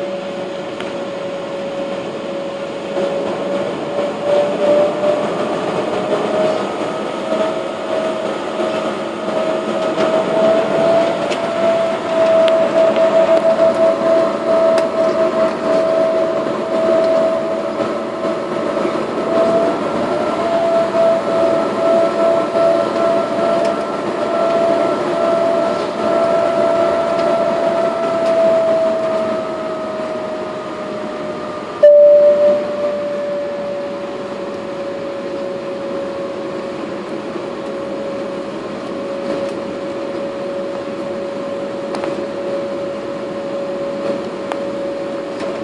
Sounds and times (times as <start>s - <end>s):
Fixed-wing aircraft, airplane: 0.0s - 45.6s.